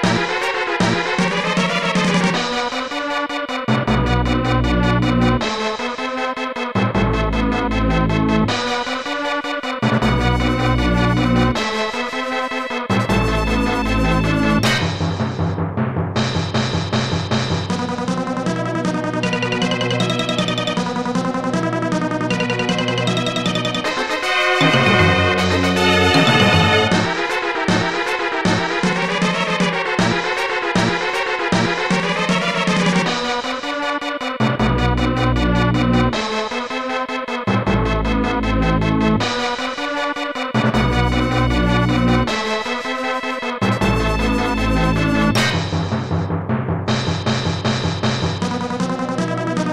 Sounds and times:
Music: 0.0s - 49.7s.

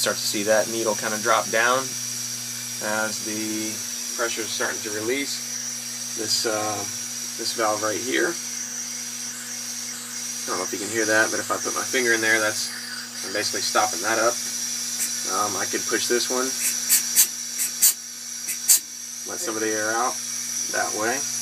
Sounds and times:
Speech: 0.0s - 1.9s, 15.3s - 16.6s, 19.3s - 21.3s.

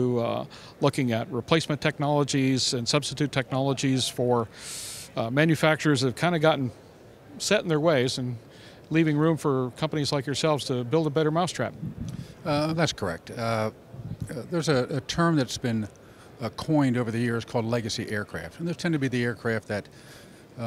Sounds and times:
Speech: 0.0s - 4.5s, 5.2s - 6.8s, 7.4s - 11.8s, 12.4s - 19.9s.

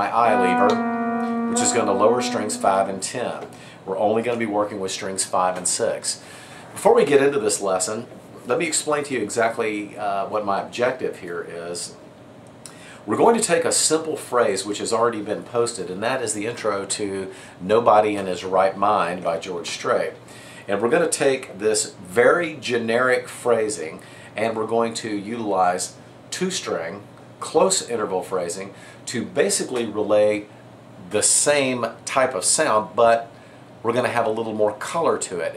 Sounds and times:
Speech: 0.0s - 0.8s, 1.6s - 12.0s, 13.0s - 35.5s.

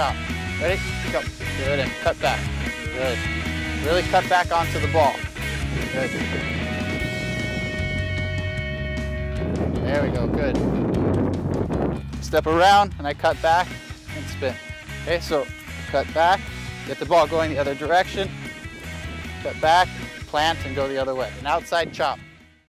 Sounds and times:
Speech: 0.0s - 2.4s, 3.0s - 3.2s, 3.8s - 5.2s, 9.8s - 10.6s, 12.2s - 18.3s, 19.4s - 22.2s
Music: 0.0s - 22.6s.

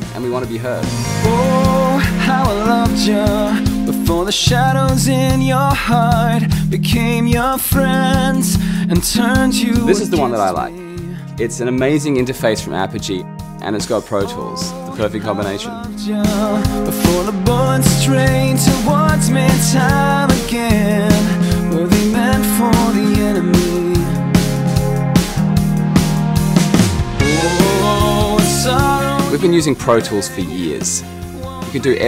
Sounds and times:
Music: 0.0s - 32.0s.

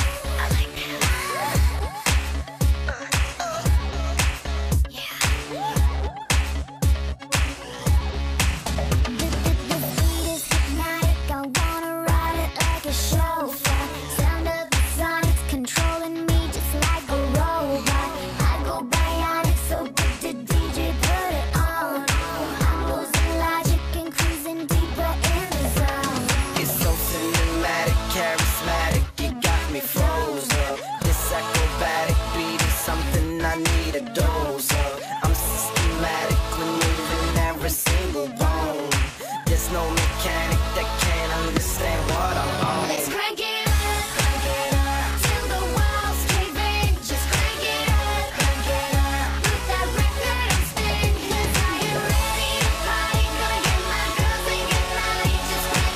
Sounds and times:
Music: 0.0s - 55.9s.

